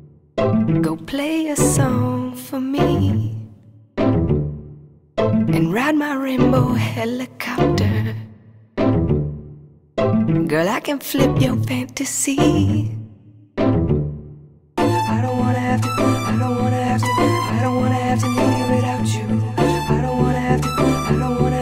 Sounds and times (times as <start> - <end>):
Music: 0.0 - 21.6.